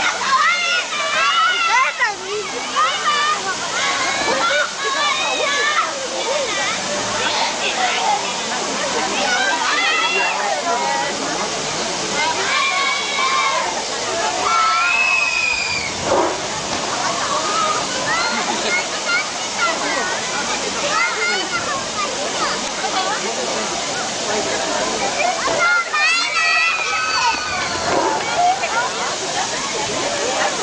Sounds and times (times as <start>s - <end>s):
Water: 0.0s - 30.6s.